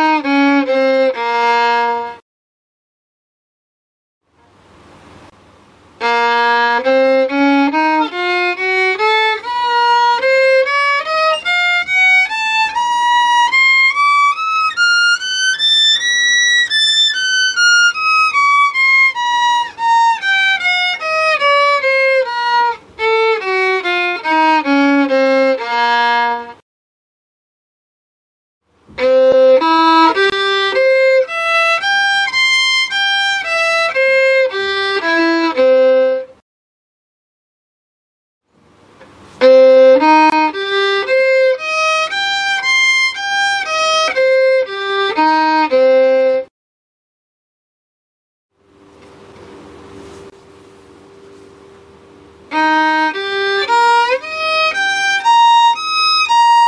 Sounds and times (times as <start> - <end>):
Violin, fiddle: 0.0 - 2.2, 6.0 - 26.6, 28.9 - 36.4, 39.4 - 46.5, 52.5 - 56.6.